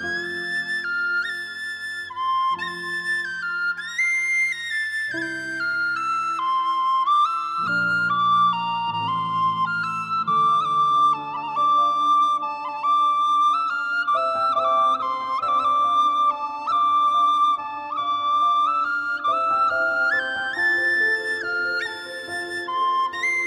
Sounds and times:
Music: 0:00.0 - 0:23.4.

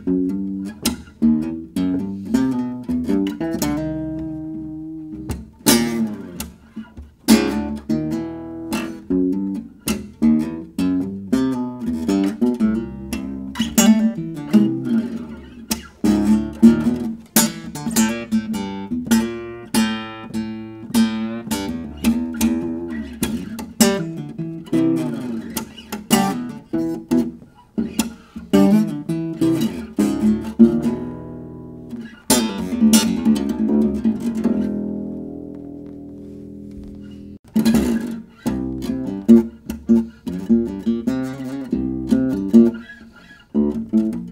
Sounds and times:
Bass guitar: 0:00.0 - 0:44.3
Strum: 0:00.0 - 0:44.3.

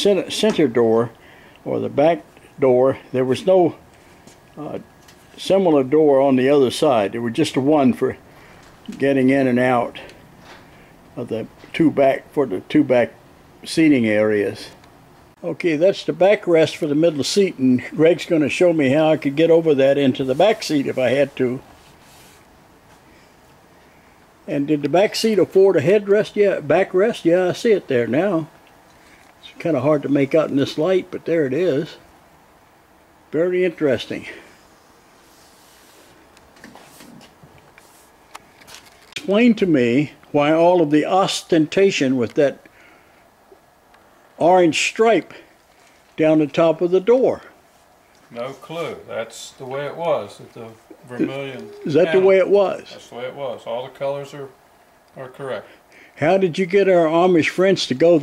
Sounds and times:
Speech: 0:00.0 - 0:03.8, 0:04.6 - 0:04.8, 0:05.4 - 0:08.2, 0:08.9 - 0:10.1, 0:11.2 - 0:14.8, 0:15.4 - 0:21.6, 0:24.5 - 0:28.5, 0:29.4 - 0:32.0, 0:33.3 - 0:34.5, 0:39.2 - 0:42.6, 0:44.4 - 0:45.5, 0:46.2 - 0:47.6, 0:48.3 - 0:54.6, 0:55.2 - 0:58.2.

